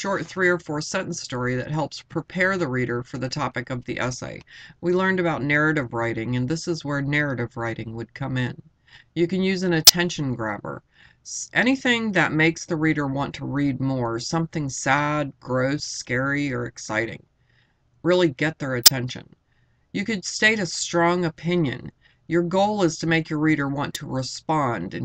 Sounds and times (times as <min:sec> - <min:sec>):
Speech: 0:00.0 - 0:17.3, 0:18.0 - 0:19.4, 0:20.0 - 0:25.0.